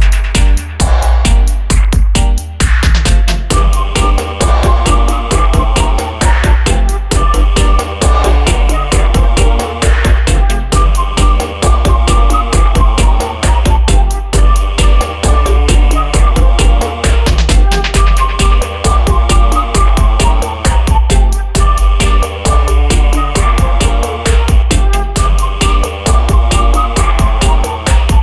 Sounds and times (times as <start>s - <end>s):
Electronic music: 0.0s - 28.2s.